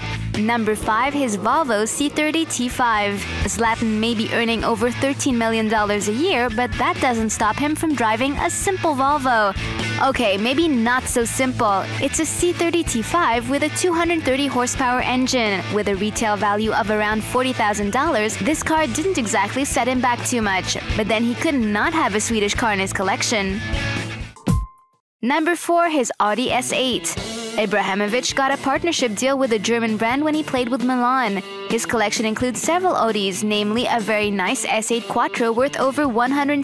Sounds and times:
Music: 0.0s - 36.6s
Speech: 0.4s - 23.6s, 25.2s - 36.6s.

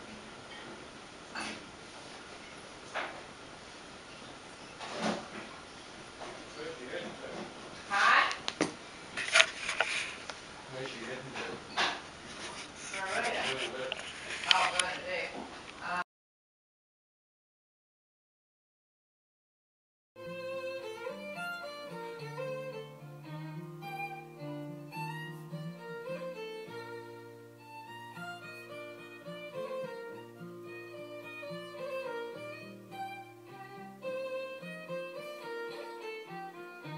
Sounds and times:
Music: 20.2s - 36.9s.

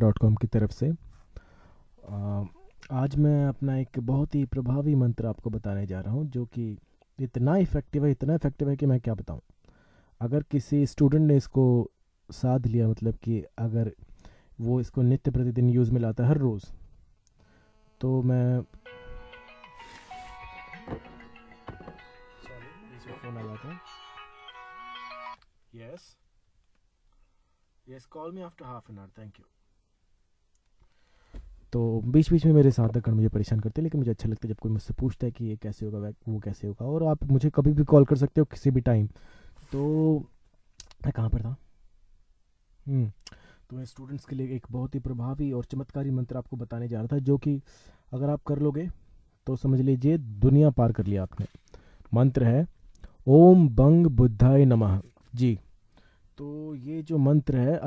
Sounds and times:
Speech: 0.0s - 1.0s, 2.0s - 9.4s, 10.2s - 14.0s, 14.6s - 16.8s, 18.0s - 18.7s, 22.4s - 23.8s, 25.7s - 26.2s, 27.9s - 29.5s, 31.7s - 39.1s, 39.7s - 41.6s, 42.9s - 51.5s, 52.1s - 52.7s, 53.3s - 55.7s, 56.4s - 57.8s.

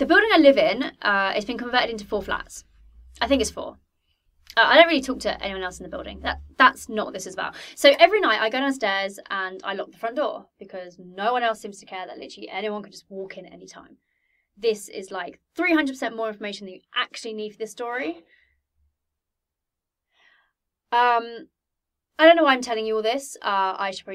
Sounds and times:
Speech: 0.0s - 2.6s, 3.2s - 3.8s, 4.5s - 13.9s, 14.6s - 18.3s, 21.0s - 21.5s, 22.2s - 24.1s.

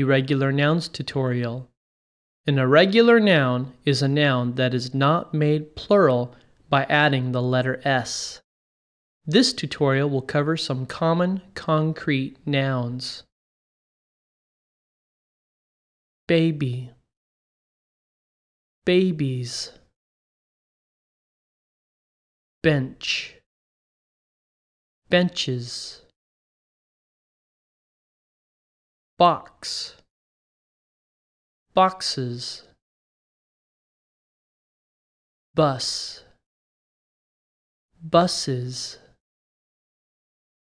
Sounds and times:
Speech: 0.0s - 1.8s, 2.5s - 8.5s, 9.3s - 13.3s, 16.3s - 17.1s, 18.9s - 19.9s, 22.6s - 23.5s, 25.1s - 26.2s, 29.2s - 30.1s, 31.7s - 32.8s, 35.6s - 36.4s, 38.0s - 39.2s.

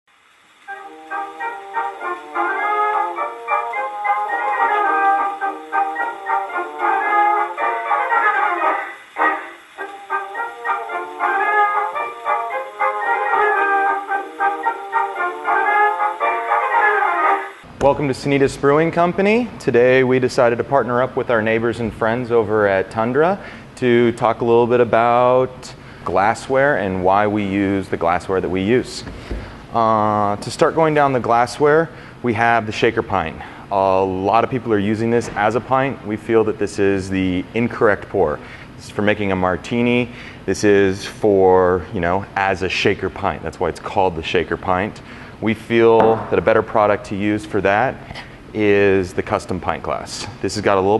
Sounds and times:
Music: 0.6s - 17.7s.

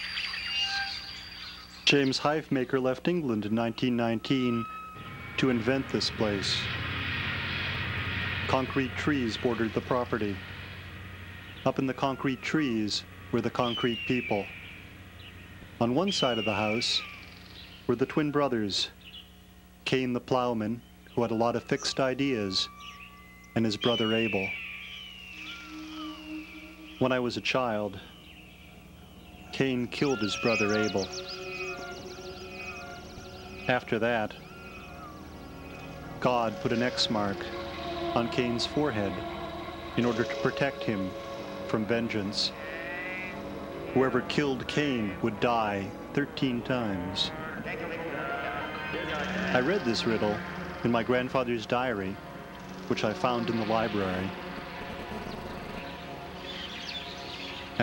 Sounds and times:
Music: 0.0s - 18.9s, 20.7s - 57.8s
Speech: 1.9s - 4.7s, 5.4s - 6.7s, 8.5s - 10.4s, 11.7s - 14.5s, 15.8s - 17.1s, 17.9s - 19.0s, 19.8s - 22.7s, 23.6s - 24.5s, 27.0s - 28.1s, 29.5s - 31.1s, 33.7s - 34.4s, 36.2s - 37.5s, 38.2s - 39.2s, 40.0s - 41.1s, 41.7s - 42.6s, 44.0s - 48.2s, 48.9s - 52.2s, 52.9s - 54.4s.

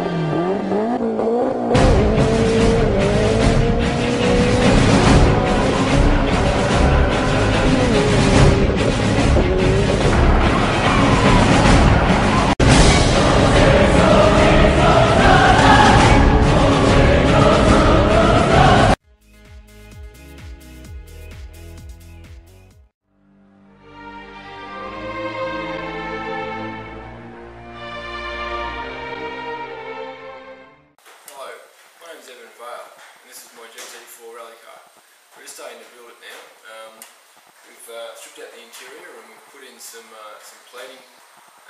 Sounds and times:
Music: 1.8s - 31.0s
Speech: 31.3s - 37.0s, 37.6s - 41.1s.

